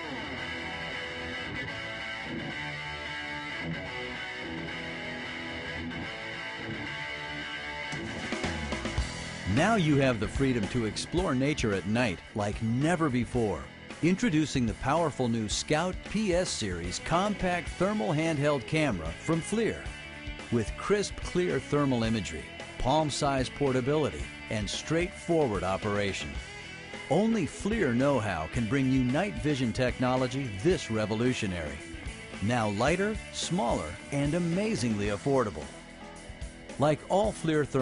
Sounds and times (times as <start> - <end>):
Music: 0.0 - 37.8
Speech: 9.5 - 19.9, 20.5 - 26.4, 27.1 - 31.8, 32.4 - 35.7, 36.8 - 37.8.